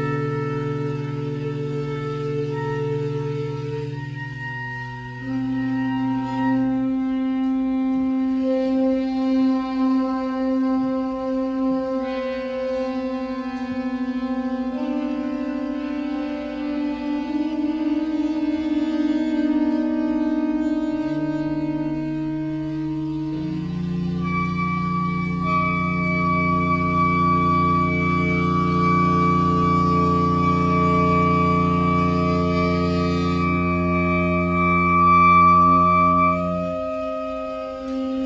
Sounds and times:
Music: 0.0 - 38.2.

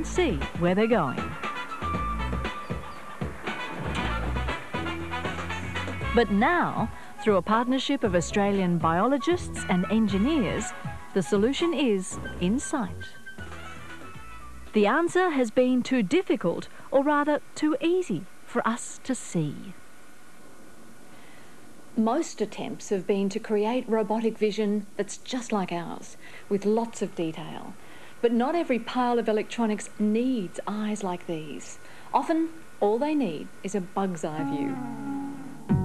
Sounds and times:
Speech: 0.0 - 1.4, 6.2 - 13.2, 14.8 - 19.8, 22.0 - 34.8
Music: 0.0 - 15.4, 34.4 - 35.8.

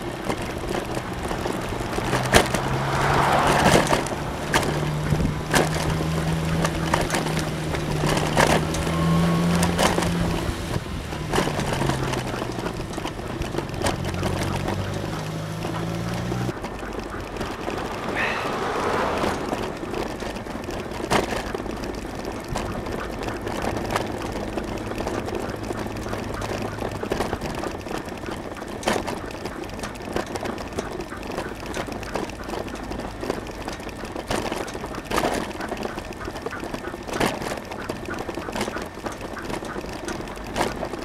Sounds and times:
Bicycle: 0.0 - 41.0.

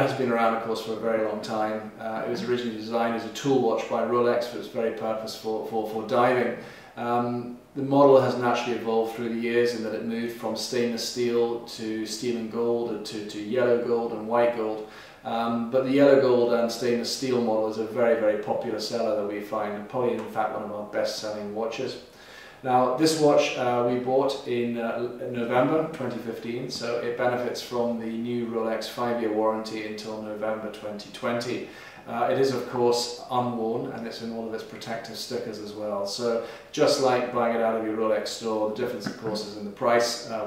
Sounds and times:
Speech: 0.0 - 40.4.

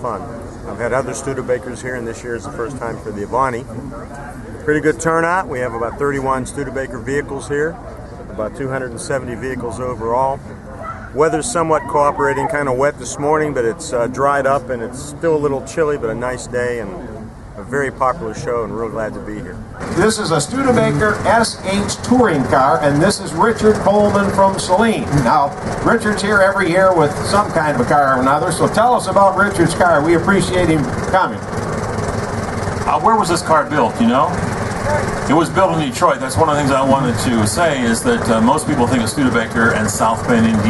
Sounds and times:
Speech: 0.0 - 10.4, 11.2 - 31.4, 32.9 - 40.7
Vehicle: 0.0 - 40.7.

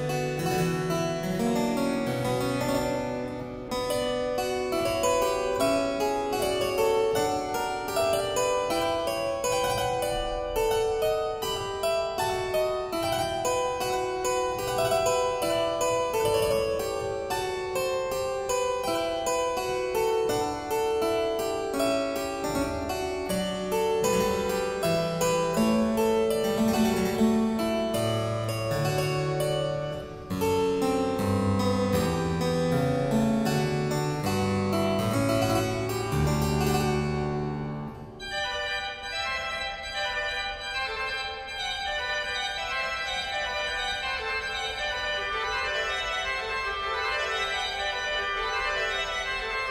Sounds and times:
Harpsichord: 0.0 - 49.7.

